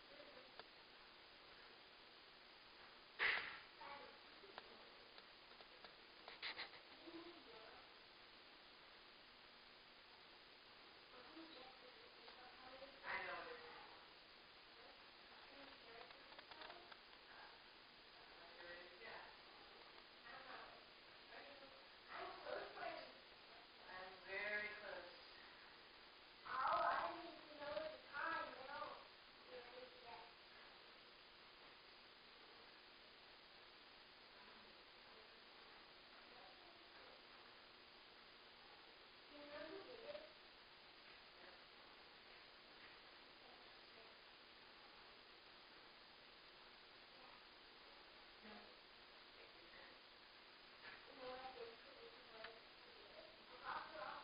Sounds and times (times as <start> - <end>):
Speech: 3.8 - 5.1, 6.9 - 7.9, 11.1 - 14.1, 14.7 - 17.6, 18.2 - 25.4, 26.4 - 30.4, 38.7 - 40.4, 50.8 - 54.2.